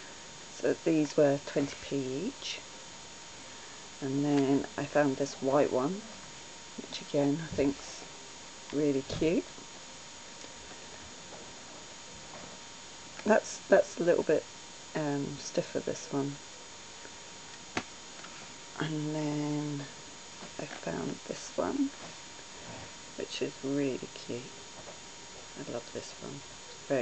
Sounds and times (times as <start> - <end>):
Speech: 0.6 - 2.6, 4.0 - 6.0, 6.8 - 8.1, 8.7 - 9.5, 13.2 - 14.4, 15.0 - 16.4, 18.8 - 19.9, 20.6 - 22.0, 23.2 - 24.5, 25.6 - 27.0.